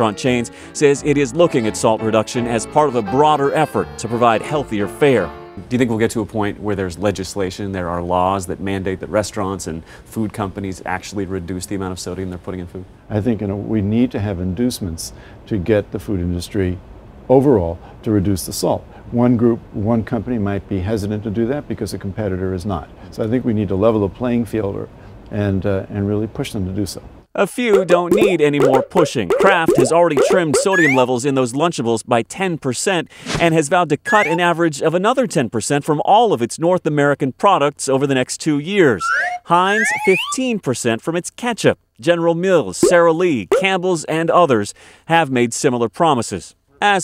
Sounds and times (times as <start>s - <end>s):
Speech: 0.0s - 47.0s.